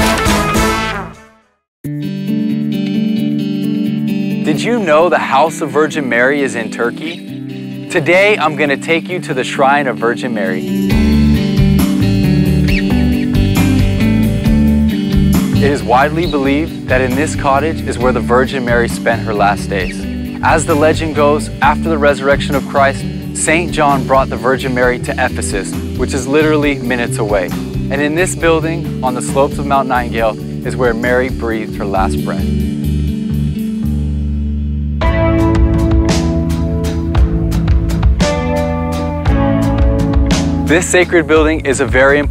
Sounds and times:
Music: 0.0 - 42.3
Speech: 4.4 - 7.2, 7.9 - 10.7, 15.6 - 32.5, 40.7 - 42.3.

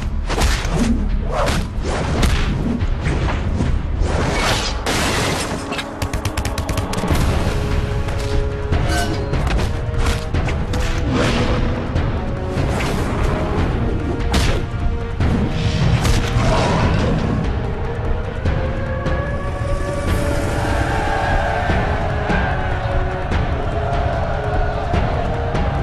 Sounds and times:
Music: 0.0 - 25.8.

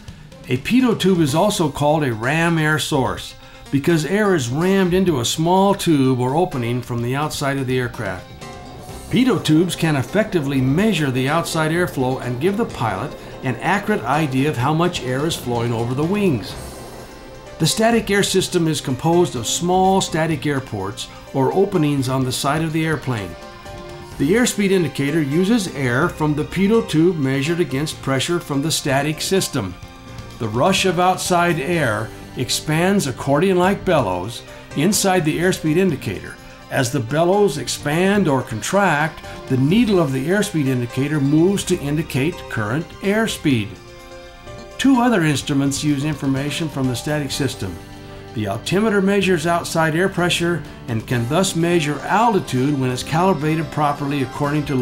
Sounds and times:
Music: 0.0 - 54.8
Speech: 0.5 - 8.3, 9.1 - 16.6, 17.6 - 23.4, 24.2 - 29.8, 30.4 - 43.8, 44.8 - 47.8, 48.4 - 54.8.

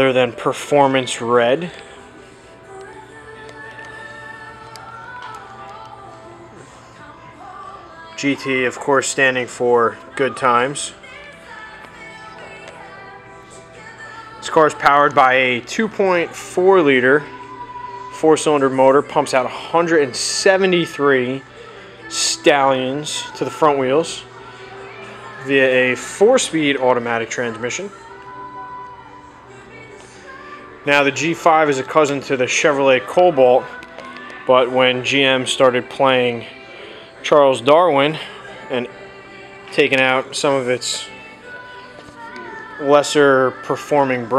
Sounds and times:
Music: 0.0 - 44.3.

